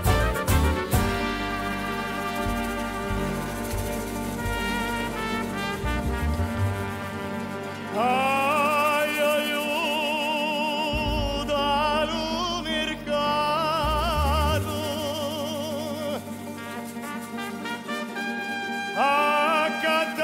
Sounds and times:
Trombone: 0:00.0 - 0:20.2
Singing: 0:19.0 - 0:20.2.

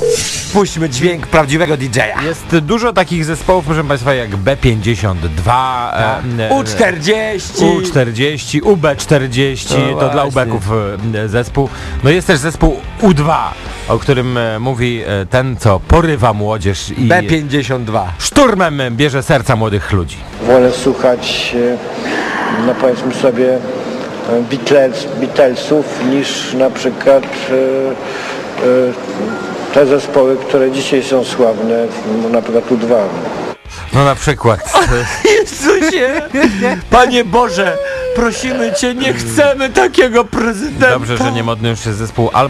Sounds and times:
Speech: 0:00.5 - 0:21.8, 0:28.6 - 0:33.2, 0:33.8 - 0:42.5.

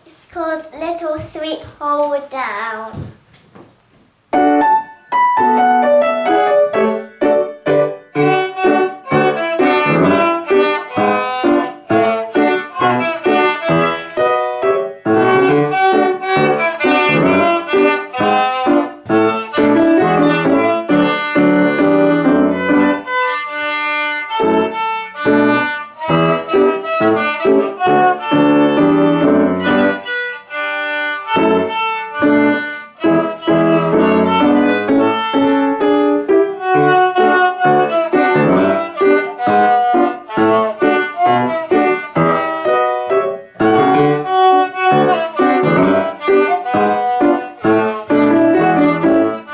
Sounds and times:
Violin, fiddle: 0:08.1 - 0:49.5.

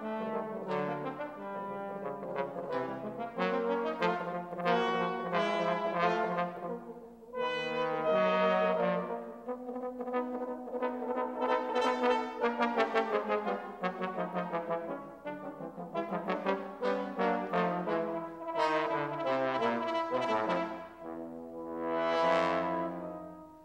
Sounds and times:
Music: 0:00.0 - 0:23.6.

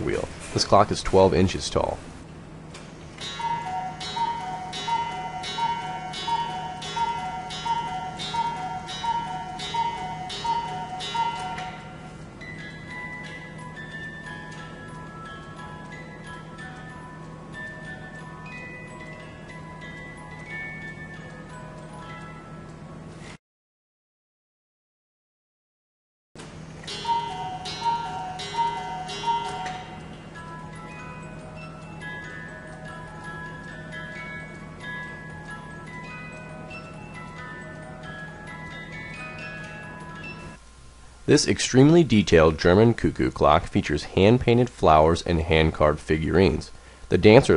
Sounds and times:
Music: 0:03.2 - 0:23.4, 0:26.8 - 0:40.6.

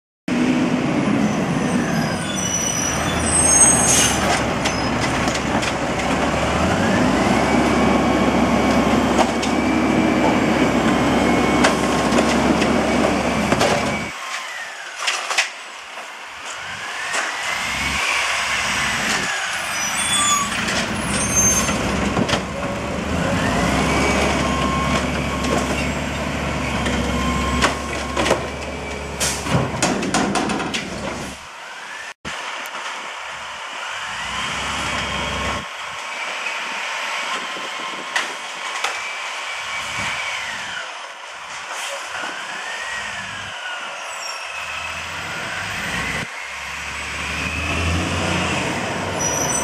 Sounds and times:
Vehicle: 0:00.3 - 0:49.6.

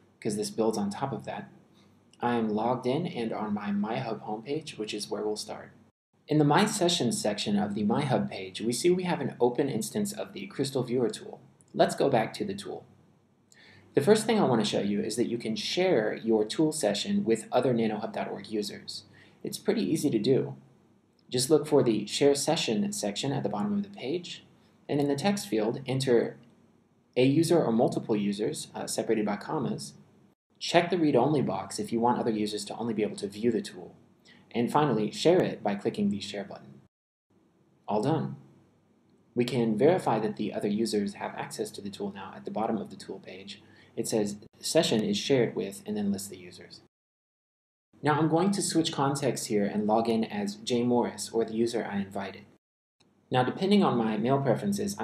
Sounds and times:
Speech: 0:00.2 - 0:01.5, 0:02.2 - 0:12.9, 0:14.0 - 0:20.6, 0:21.3 - 0:26.4, 0:27.2 - 0:30.0, 0:30.6 - 0:36.8, 0:37.9 - 0:38.4, 0:39.4 - 0:46.9, 0:48.0 - 0:52.6, 0:53.3 - 0:55.0.

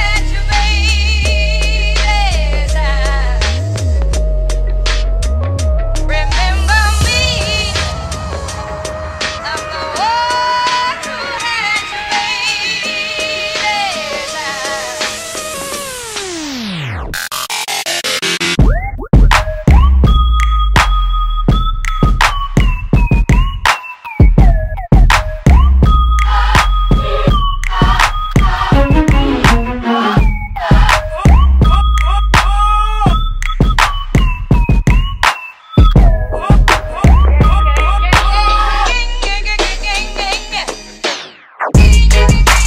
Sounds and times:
Music: 0:00.0 - 0:42.6.

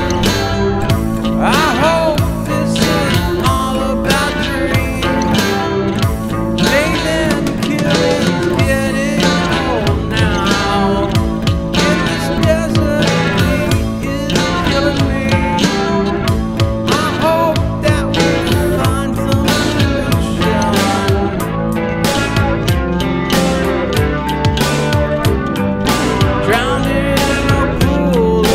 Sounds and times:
Music: 0:00.0 - 0:28.5.

